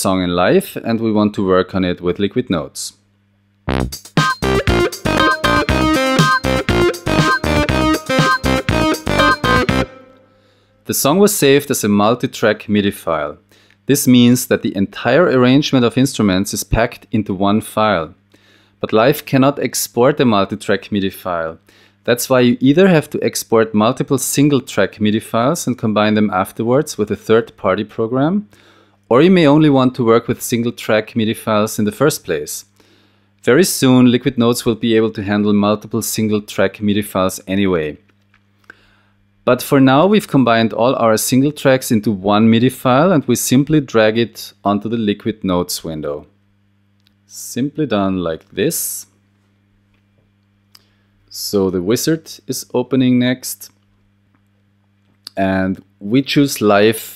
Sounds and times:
Speech: 0:00.0 - 0:03.0, 0:10.9 - 0:18.2, 0:18.8 - 0:28.5, 0:29.1 - 0:32.7, 0:33.4 - 0:38.0, 0:39.4 - 0:46.3, 0:47.3 - 0:49.2, 0:51.3 - 0:53.8, 0:55.3 - 0:57.1
Music: 0:03.7 - 0:10.8.

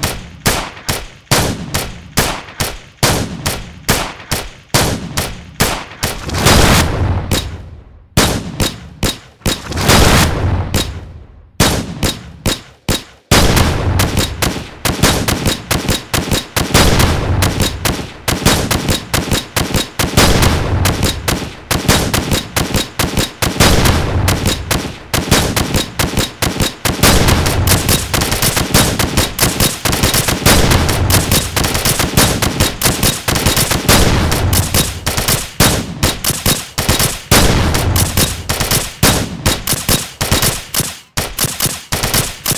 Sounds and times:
Gunshot, gunfire: 0:00.0 - 0:42.5.

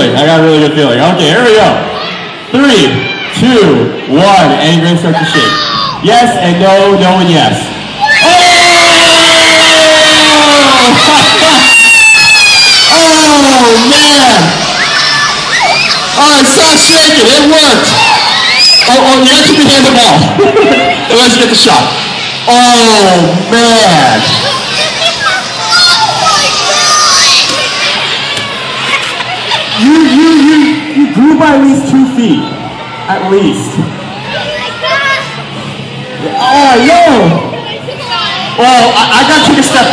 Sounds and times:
Crowd: 0:00.0 - 0:39.9
Children shouting: 0:01.8 - 0:03.4, 0:05.1 - 0:06.1, 0:07.9 - 0:22.9, 0:23.8 - 0:31.1, 0:34.0 - 0:39.9.

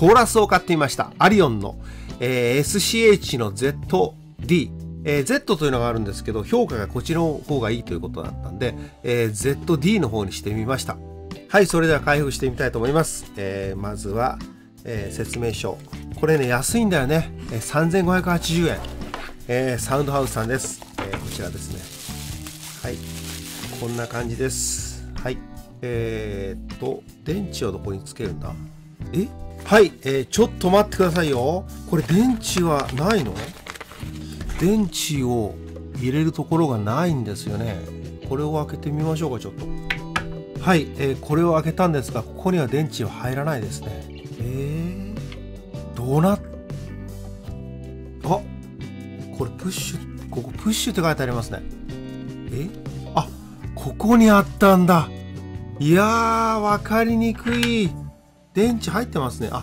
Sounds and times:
Speech: 0:00.0 - 0:22.0, 0:22.8 - 0:23.0, 0:23.6 - 0:33.6, 0:34.5 - 0:39.6, 0:40.6 - 0:45.3, 0:46.0 - 0:46.5, 0:48.2 - 0:48.5, 0:49.3 - 0:51.7, 0:52.5 - 0:55.1, 0:55.8 - 0:58.0, 0:58.6 - 0:59.6.

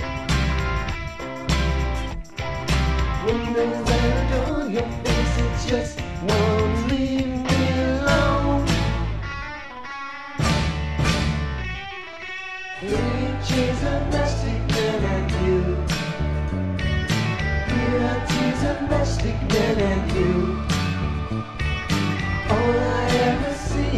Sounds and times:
Psychedelic rock: 0:00.0 - 0:23.9.

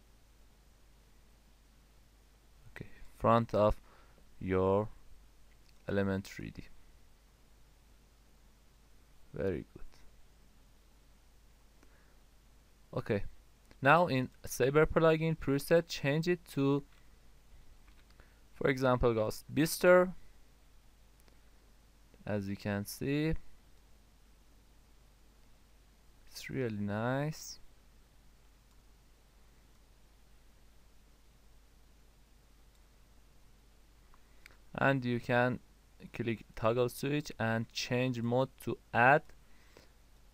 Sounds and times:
Silence: 0:00.0 - 0:05.9, 0:06.5 - 0:14.5, 0:16.8 - 0:22.4, 0:23.3 - 0:26.8, 0:27.4 - 0:36.6, 0:38.6 - 0:40.3
Speech: 0:02.7 - 0:03.8, 0:04.4 - 0:05.0, 0:05.8 - 0:06.8, 0:09.3 - 0:10.1, 0:12.9 - 0:16.9, 0:18.6 - 0:20.2, 0:22.2 - 0:23.5, 0:26.3 - 0:27.7, 0:34.7 - 0:39.4.

